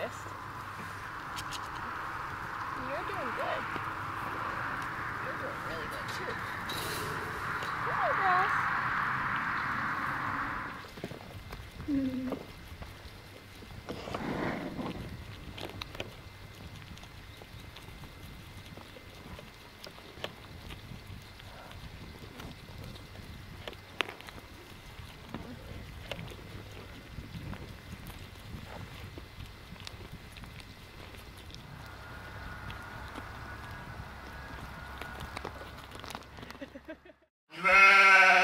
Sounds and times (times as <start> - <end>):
Animal: 0.0 - 38.4.